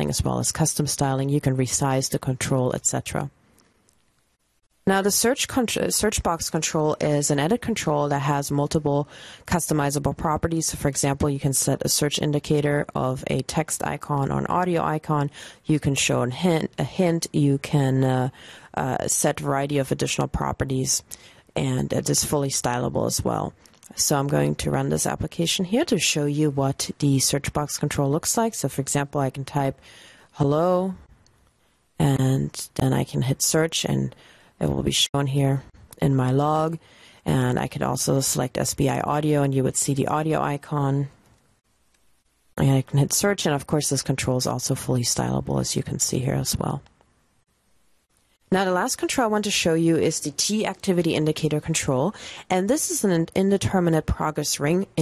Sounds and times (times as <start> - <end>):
Speech: 0.0 - 3.3, 4.8 - 29.8, 30.4 - 31.0, 32.0 - 41.2, 42.6 - 46.9, 48.5 - 55.0.